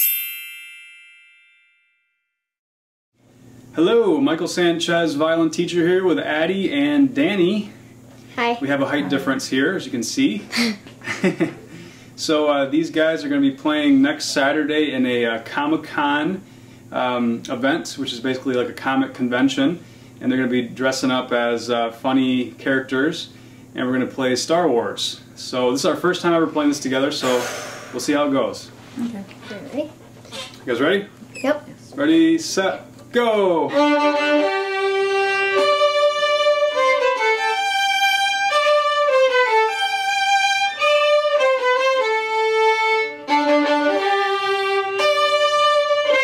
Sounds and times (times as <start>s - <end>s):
Speech: 3.8s - 7.8s, 8.4s - 10.5s, 12.2s - 27.4s, 30.7s - 33.8s
Violin, fiddle: 33.6s - 46.2s.